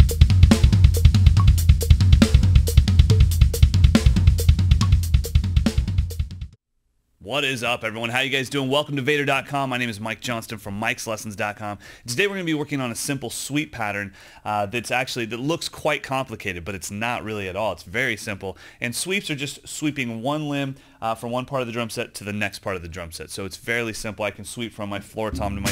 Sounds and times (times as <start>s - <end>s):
Speech: 7.2s - 25.7s.